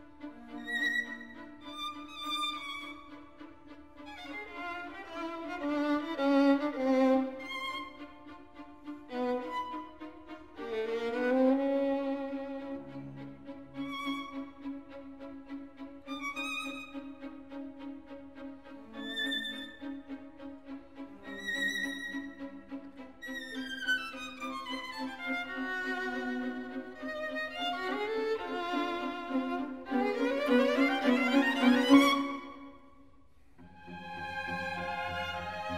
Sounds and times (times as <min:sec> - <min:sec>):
Violin, fiddle: 0:00.0 - 0:33.0, 0:33.6 - 0:35.7.